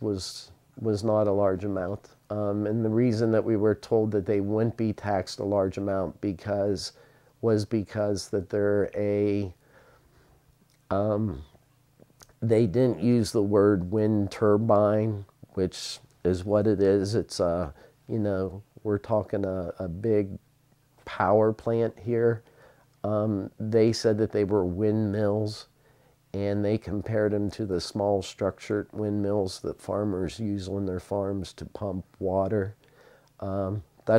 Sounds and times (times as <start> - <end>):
Speech: 0.0 - 9.6, 10.9 - 11.6, 12.2 - 20.4, 21.0 - 32.8, 33.4 - 34.1.